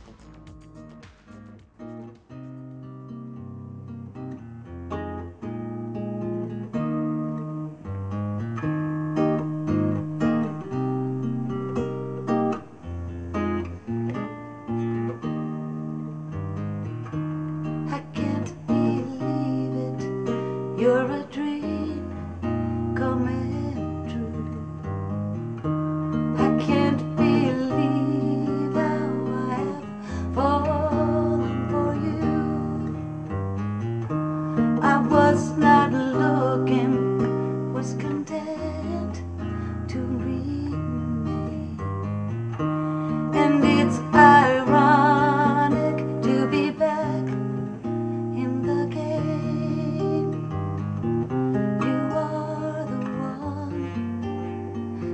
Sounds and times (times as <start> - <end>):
Music: 0.0 - 55.1.